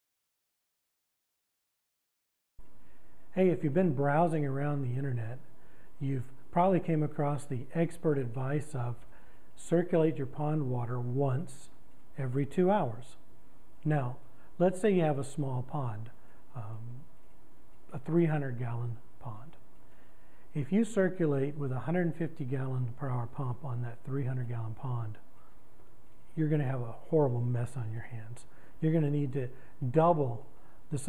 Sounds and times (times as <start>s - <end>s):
Speech: 3.4s - 5.4s, 6.0s - 9.0s, 9.6s - 13.2s, 13.8s - 17.1s, 17.9s - 19.6s, 20.6s - 25.3s, 26.4s - 31.0s.